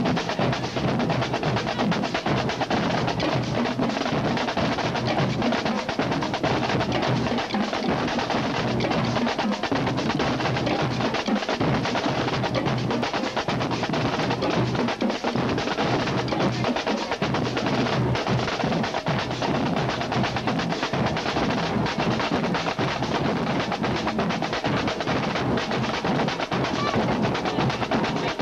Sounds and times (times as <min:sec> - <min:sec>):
Percussion: 0:00.0 - 0:28.4.